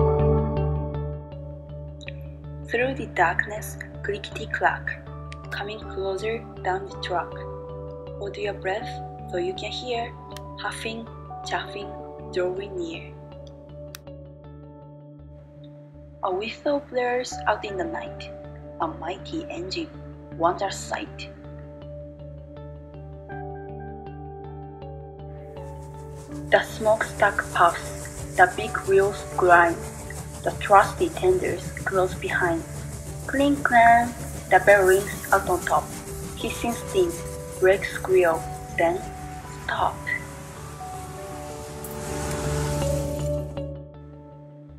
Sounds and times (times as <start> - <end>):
Music: 0.0 - 44.7
Speech: 2.7 - 7.4, 8.2 - 13.1, 16.2 - 21.3, 26.5 - 29.8, 30.4 - 32.7, 33.3 - 39.0, 39.6 - 40.2.